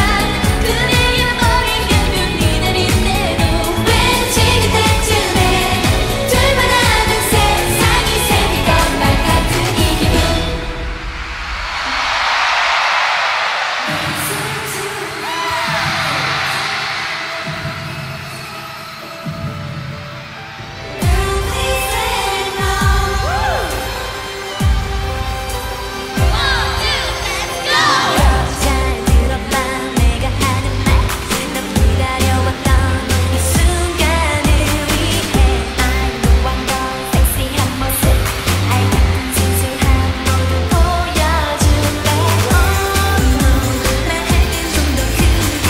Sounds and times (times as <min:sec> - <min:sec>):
Singing: 0:00.0 - 0:11.0, 0:20.9 - 0:24.6, 0:26.1 - 0:45.7.